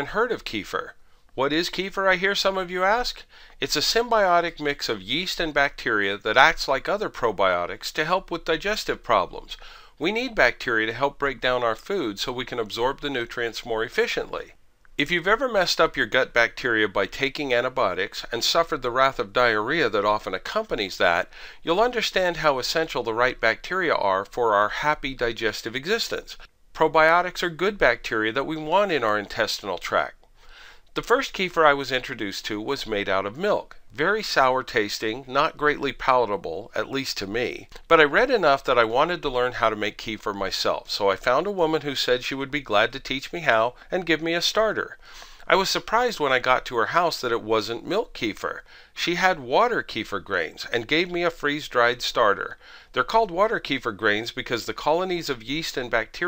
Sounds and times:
Speech: 0.0 - 30.2, 31.0 - 56.2.

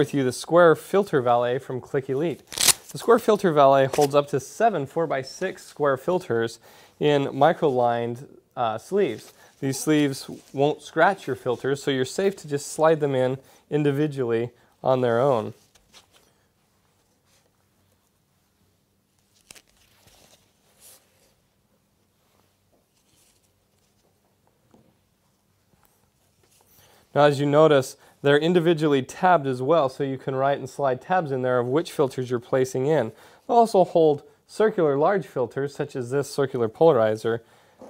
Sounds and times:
Speech: 0.0 - 15.6, 27.1 - 37.8.

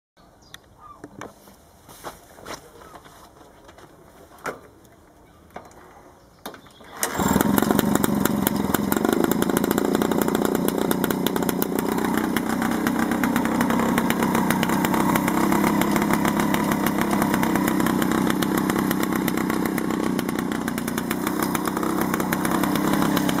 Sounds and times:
Outside, rural or natural: 0.2 - 23.4
Motorcycle: 6.5 - 23.4.

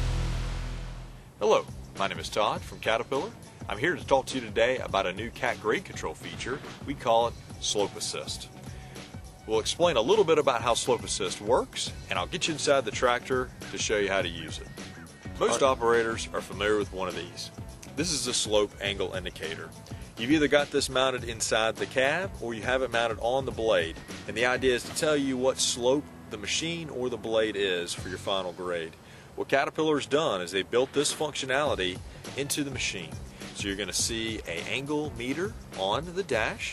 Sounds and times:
Music: 0.0 - 36.7
Speech: 1.4 - 8.5, 9.5 - 14.7, 15.4 - 36.7.

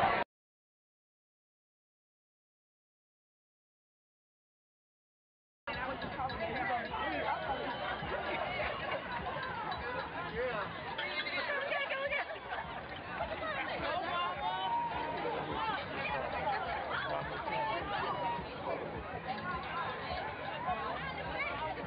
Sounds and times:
Outside, urban or manmade: 0.0 - 0.3, 5.7 - 21.8
Female speech, woman speaking: 5.7 - 7.6, 11.0 - 18.6, 19.2 - 21.8.

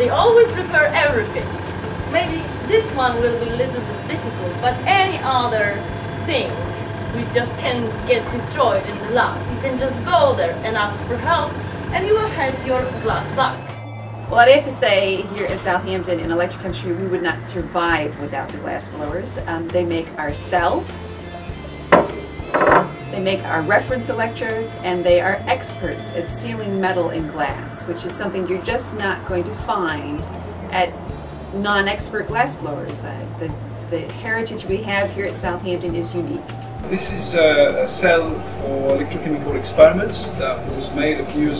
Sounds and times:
Speech: 0.0 - 1.5, 2.1 - 13.6, 14.3 - 21.2, 23.1 - 30.9, 31.6 - 41.5
Music: 0.0 - 41.5.

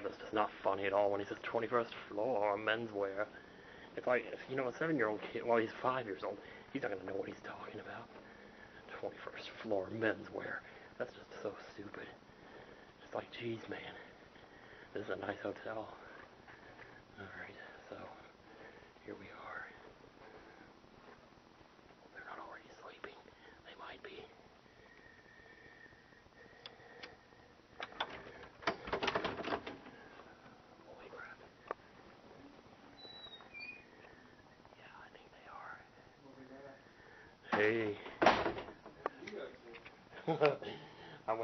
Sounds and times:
Inside, small room: 0.0 - 41.4.

